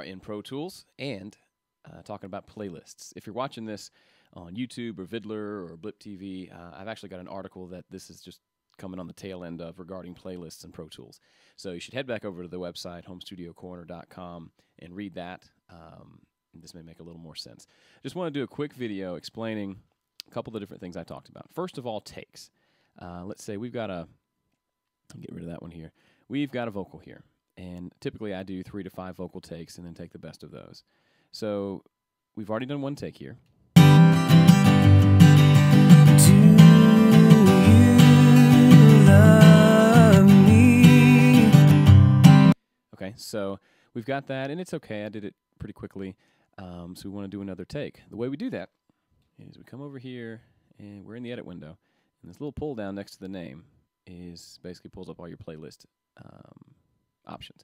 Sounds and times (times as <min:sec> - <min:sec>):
Speech: 0:00.0 - 0:24.2, 0:25.1 - 0:33.5, 0:42.9 - 0:48.8, 0:49.4 - 0:57.6
Music: 0:33.8 - 0:42.6.